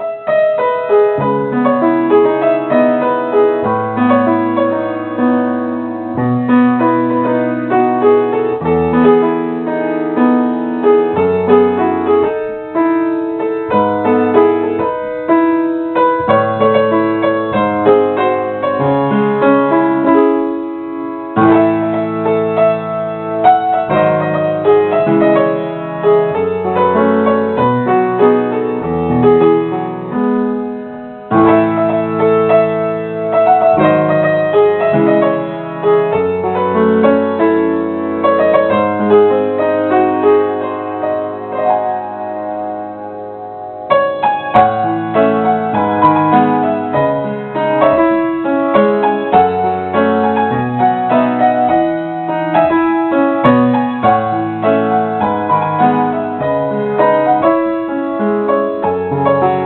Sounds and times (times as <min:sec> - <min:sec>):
Music: 0:00.0 - 0:59.6.